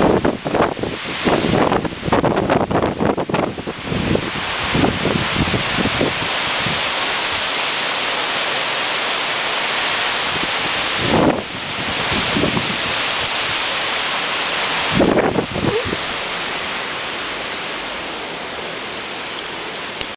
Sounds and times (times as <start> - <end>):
Rain: 0.0 - 20.1.